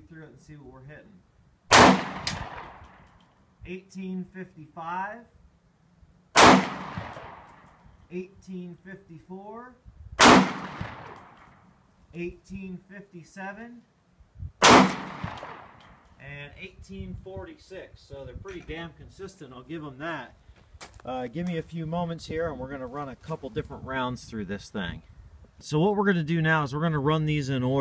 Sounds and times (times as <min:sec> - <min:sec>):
Speech: 0:00.0 - 0:01.2, 0:03.7 - 0:05.3, 0:08.1 - 0:09.8, 0:12.2 - 0:13.9, 0:16.2 - 0:20.4, 0:21.0 - 0:25.0, 0:25.6 - 0:27.8.